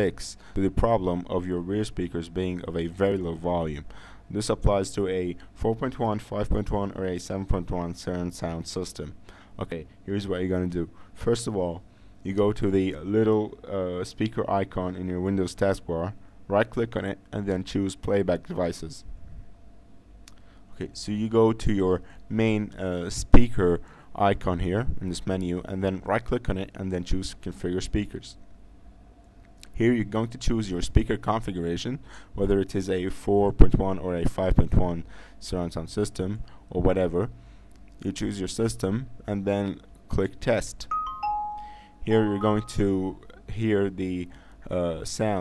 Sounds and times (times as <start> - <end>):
Speech: 0.0 - 19.1, 20.8 - 28.4, 29.6 - 37.4, 38.0 - 40.9, 42.0 - 45.4.